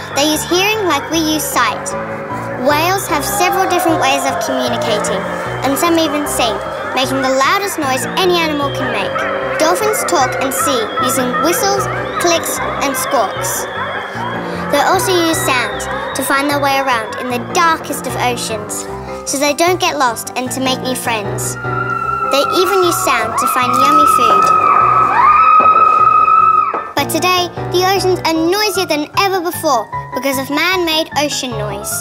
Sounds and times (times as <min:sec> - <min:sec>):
Speech: 0:00.0 - 0:02.0, 0:02.6 - 0:13.6, 0:14.6 - 0:21.6, 0:22.3 - 0:24.6, 0:27.0 - 0:32.0
Cacophony: 0:00.0 - 0:18.8
Music: 0:00.0 - 0:32.0.